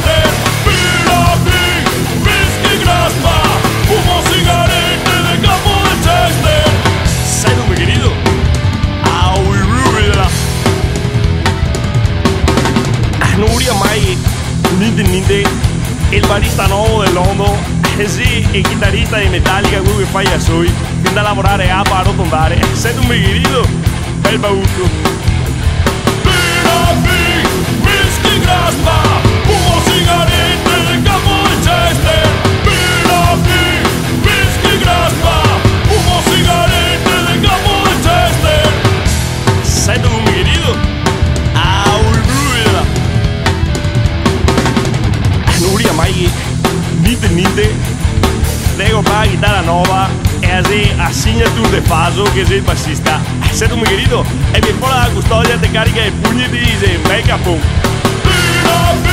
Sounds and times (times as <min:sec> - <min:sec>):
Music: 0:00.0 - 0:59.1
Speech: 0:07.3 - 0:08.2, 0:09.1 - 0:10.4, 0:13.2 - 0:25.1, 0:39.7 - 0:40.8, 0:41.6 - 0:43.0, 0:45.5 - 0:47.8, 0:48.8 - 0:57.7.